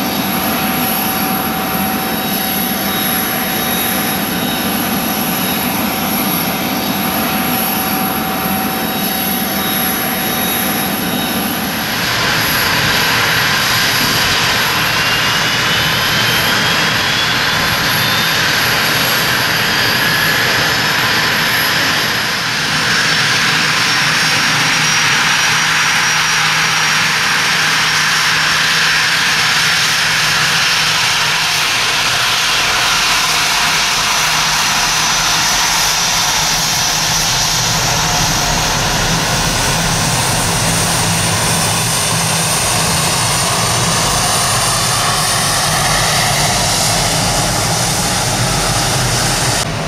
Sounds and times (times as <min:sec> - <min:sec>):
Aircraft engine: 0:00.0 - 0:49.8
Fixed-wing aircraft, airplane: 0:00.0 - 0:49.8
Outside, rural or natural: 0:00.0 - 0:49.8.